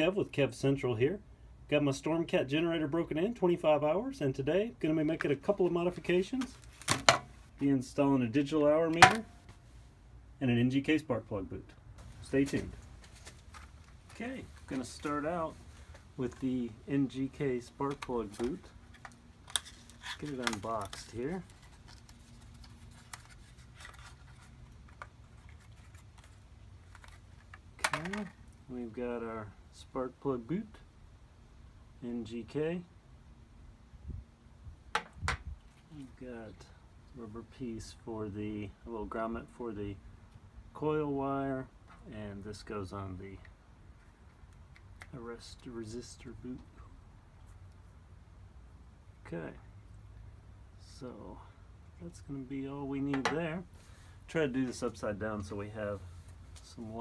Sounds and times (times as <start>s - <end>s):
Speech: 0.0s - 6.6s, 7.6s - 9.3s, 10.4s - 12.8s, 14.1s - 15.6s, 16.2s - 18.7s, 20.2s - 21.5s, 27.8s - 30.9s, 32.0s - 32.9s, 35.9s - 40.0s, 40.7s - 43.5s, 45.1s - 46.9s, 49.2s - 49.7s, 50.8s - 53.7s, 54.3s - 57.0s.